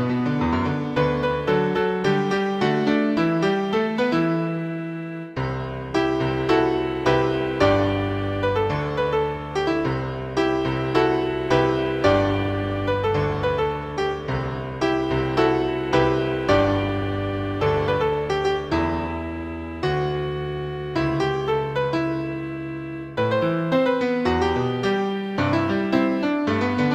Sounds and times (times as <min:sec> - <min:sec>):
Music: 0:00.0 - 0:26.9.